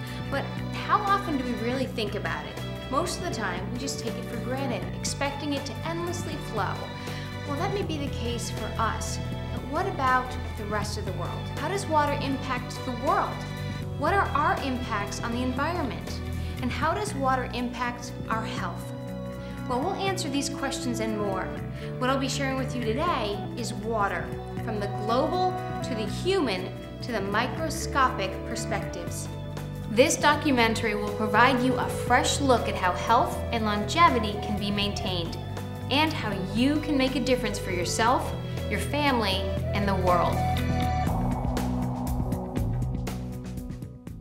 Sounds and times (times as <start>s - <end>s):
Music: 0.0s - 44.2s
Speech: 0.3s - 13.4s, 14.0s - 18.9s, 19.7s - 29.3s, 29.9s - 40.4s.